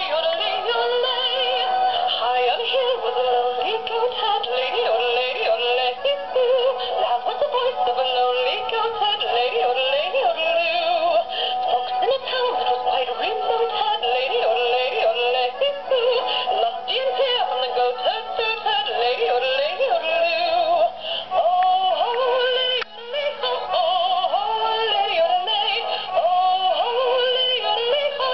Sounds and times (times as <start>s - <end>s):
Synthetic singing: 0.0s - 11.2s, 11.8s - 28.3s
Music: 0.0s - 28.3s.